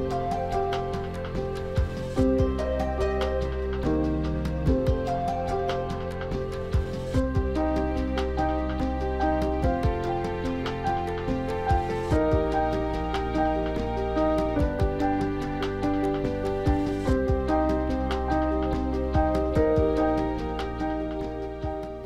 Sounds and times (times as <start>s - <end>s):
Music: 0.0s - 22.0s.